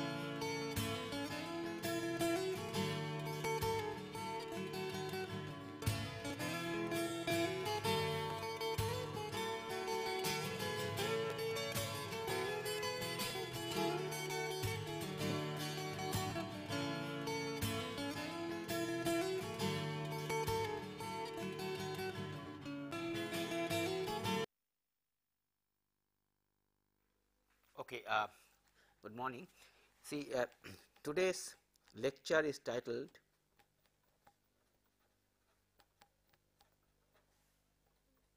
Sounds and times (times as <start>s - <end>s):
Music: 0.0s - 24.5s.